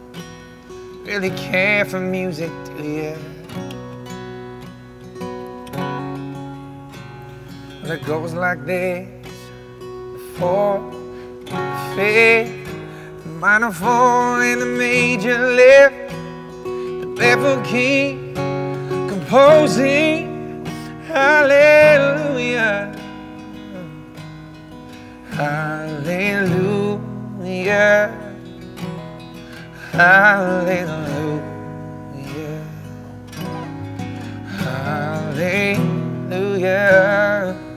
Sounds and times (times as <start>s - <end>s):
Music: 0.0s - 37.7s.